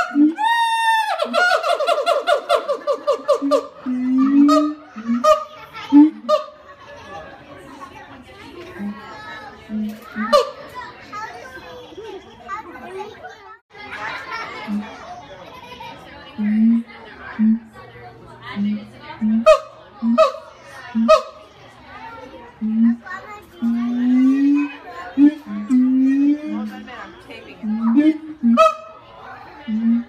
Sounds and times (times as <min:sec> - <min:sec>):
Children playing: 0:00.0 - 0:30.0
Speech: 0:03.8 - 0:30.0.